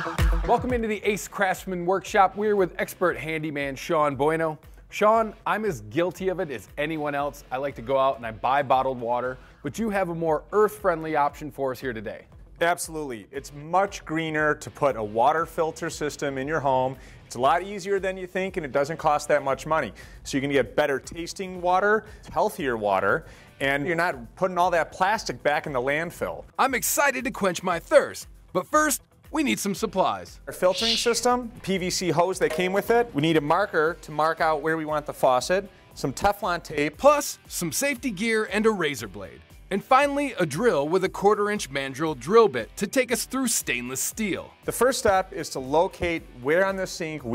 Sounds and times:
Music: 0:00.0 - 0:47.3
Speech: 0:00.5 - 0:47.3.

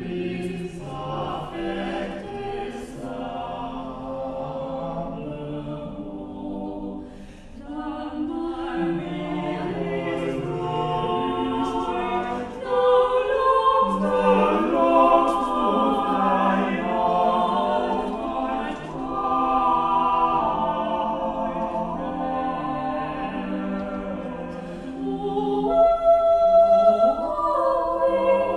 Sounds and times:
Music: 0:00.0 - 0:28.5.

